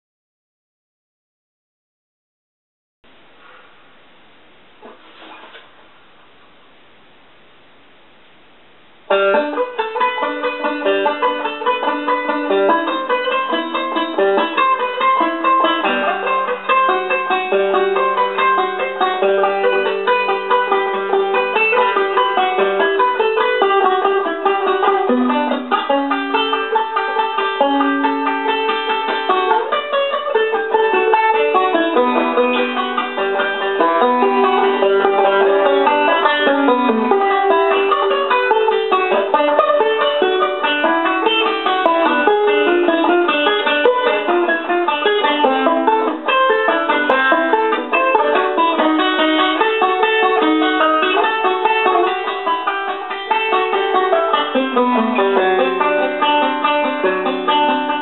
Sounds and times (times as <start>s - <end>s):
Banjo: 4.6s - 6.0s, 8.7s - 58.0s.